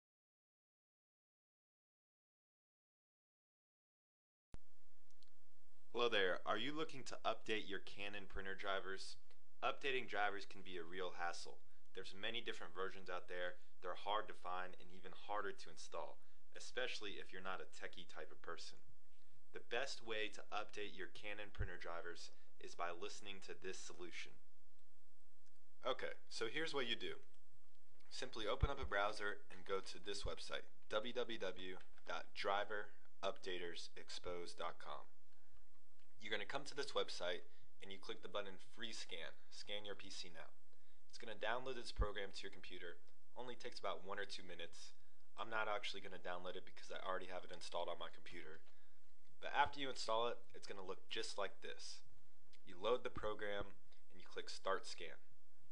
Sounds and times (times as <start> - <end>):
Speech: 6.0 - 18.8, 19.6 - 24.4, 25.8 - 27.2, 28.1 - 35.2, 36.2 - 48.6, 49.4 - 55.3.